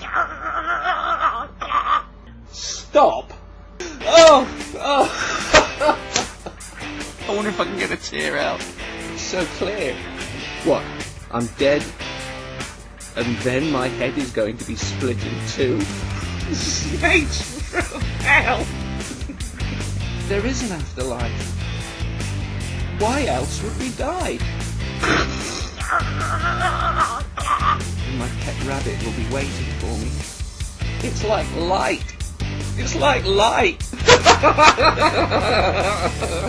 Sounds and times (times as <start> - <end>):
Music: 2.1 - 36.4
Snicker: 4.9 - 6.8, 16.2 - 18.1, 19.0 - 19.9, 25.0 - 27.9, 33.9 - 36.4
Speech: 7.3 - 8.6, 10.6 - 11.9, 13.2 - 15.9, 20.3 - 21.4, 23.0 - 24.4, 28.1 - 30.2, 31.0 - 32.2, 32.8 - 33.8.